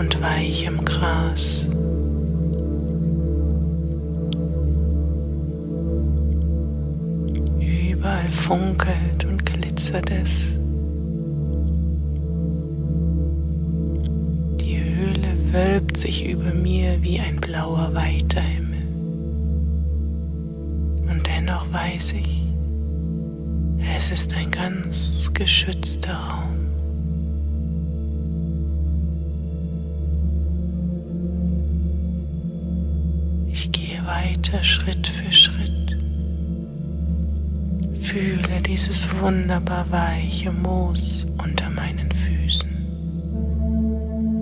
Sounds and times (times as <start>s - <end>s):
Speech: 0.0s - 1.8s, 7.6s - 10.6s, 14.6s - 19.0s, 21.0s - 22.6s, 23.8s - 26.7s, 33.5s - 36.0s, 37.9s - 42.9s
Singing bowl: 0.0s - 44.4s.